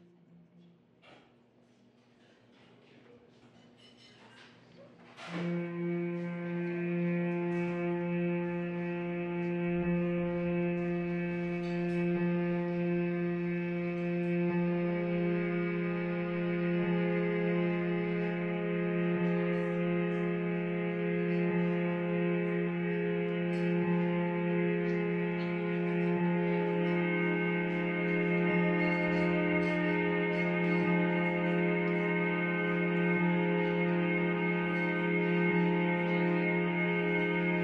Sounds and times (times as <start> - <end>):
String section: 5.2 - 37.6.